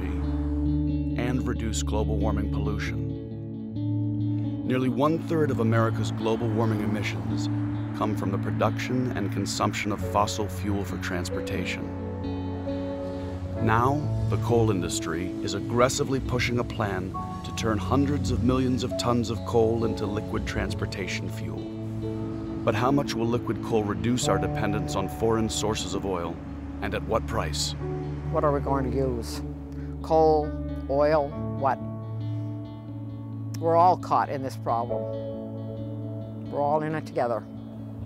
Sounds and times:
Music: 0.0 - 38.0
Speech: 1.2 - 3.0, 4.7 - 11.9, 13.6 - 21.6, 22.7 - 29.4, 30.0 - 31.8, 33.6 - 34.9, 36.5 - 37.4.

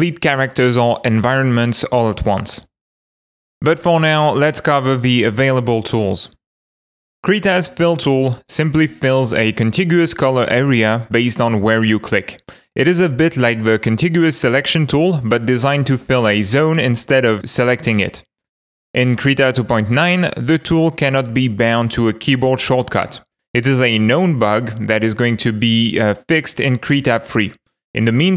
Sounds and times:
Speech: 0.0 - 2.7, 3.6 - 6.4, 7.2 - 18.3, 19.0 - 28.3.

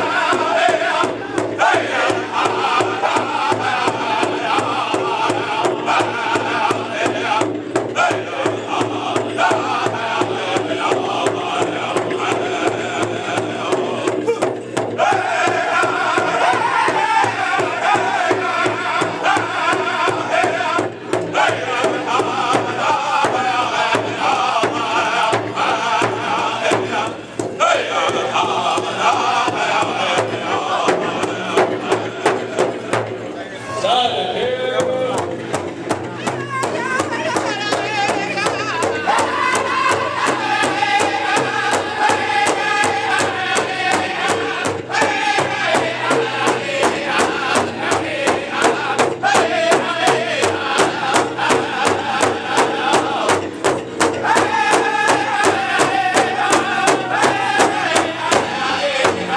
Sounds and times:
Drum: 0.0 - 59.3.

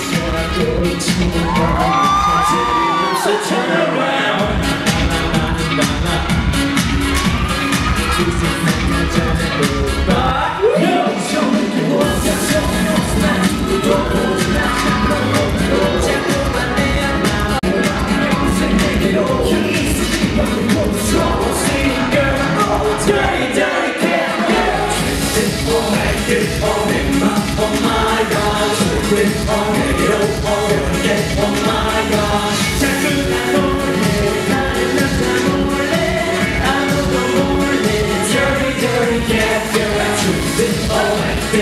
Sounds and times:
Music: 0.0 - 41.6.

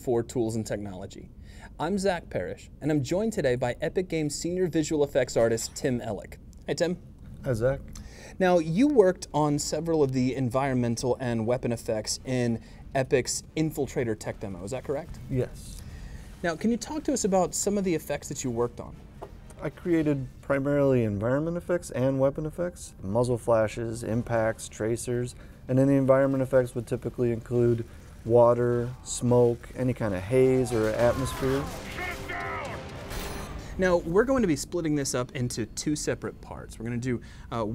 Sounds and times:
Speech: 16.4 - 18.9, 19.6 - 32.8.

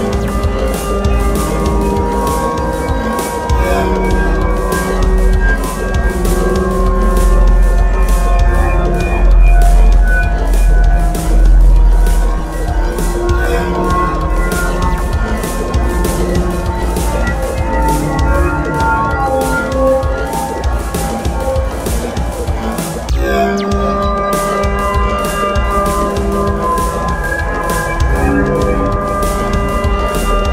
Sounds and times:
House music: 0.0 - 30.5.

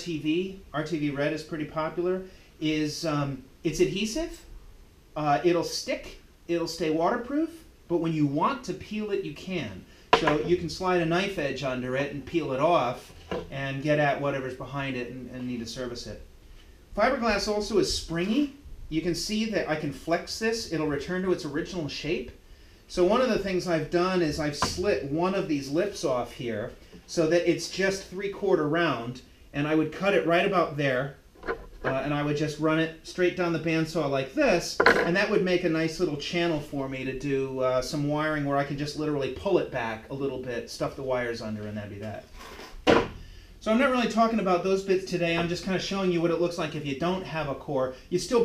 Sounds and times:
Wood: 10.1 - 10.6, 13.1 - 13.6, 24.4 - 25.0, 31.4 - 32.2, 34.7 - 35.2, 42.4 - 43.2.

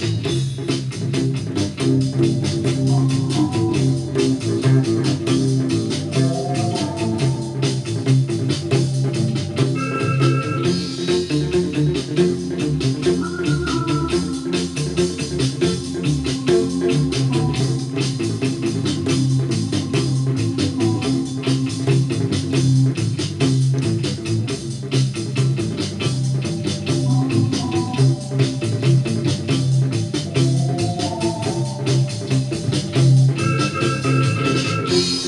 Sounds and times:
Strum: 0.0 - 35.2.

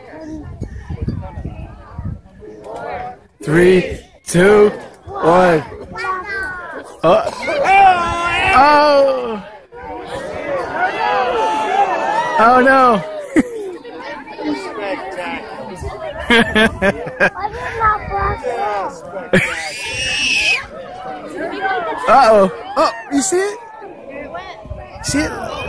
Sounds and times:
Speech: 0.0 - 13.1.

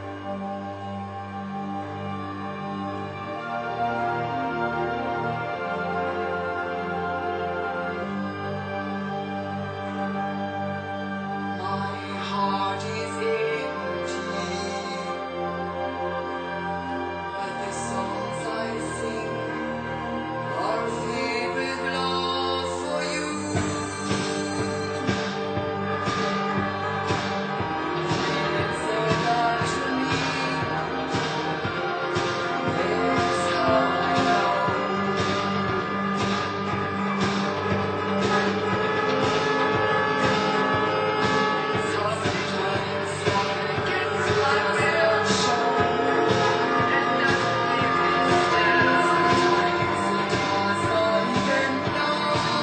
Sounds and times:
Music: 0.0 - 52.6.

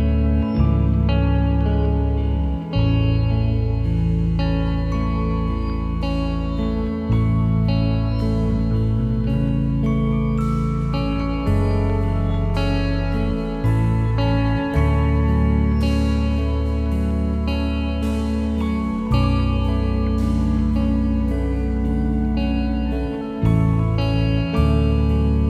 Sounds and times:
Music: 0.0 - 25.5.

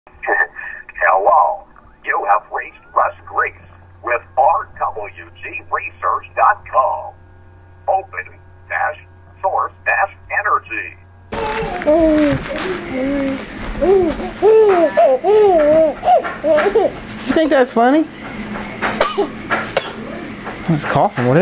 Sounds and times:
Radio: 0.1 - 7.2, 7.9 - 11.0
Speech: 0.2 - 7.2, 7.9 - 11.0, 20.7 - 21.4.

